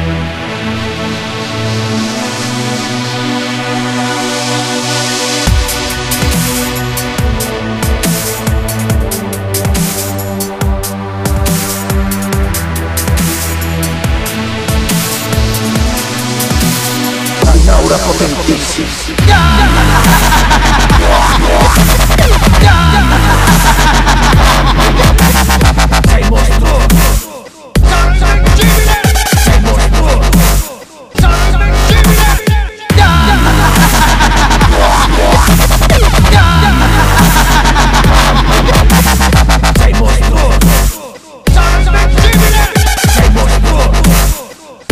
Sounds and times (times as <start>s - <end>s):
Dubstep: 0.0s - 44.9s.